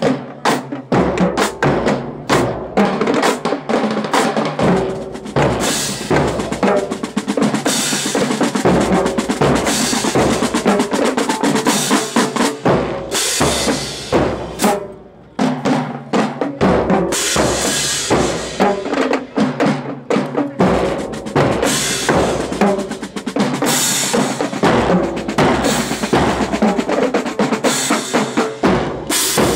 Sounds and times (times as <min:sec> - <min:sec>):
Drum: 0:00.0 - 0:29.5.